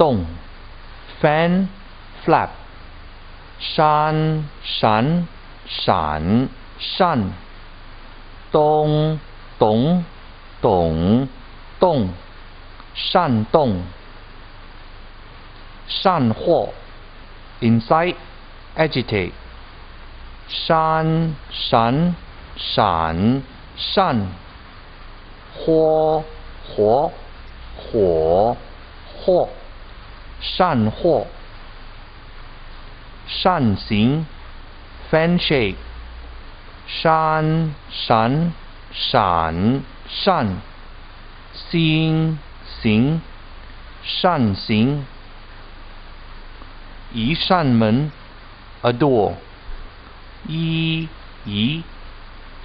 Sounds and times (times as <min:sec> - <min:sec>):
Speech: 0:00.0 - 0:00.5, 0:01.2 - 0:02.7, 0:03.6 - 0:07.4, 0:08.6 - 0:12.3, 0:13.0 - 0:14.0, 0:15.9 - 0:16.9, 0:17.6 - 0:19.4, 0:20.5 - 0:24.4, 0:25.6 - 0:29.7, 0:30.4 - 0:31.4, 0:33.3 - 0:34.4, 0:35.1 - 0:35.9, 0:36.9 - 0:40.7, 0:41.6 - 0:43.3, 0:44.0 - 0:45.2, 0:47.1 - 0:48.2, 0:48.8 - 0:49.5, 0:50.4 - 0:51.9.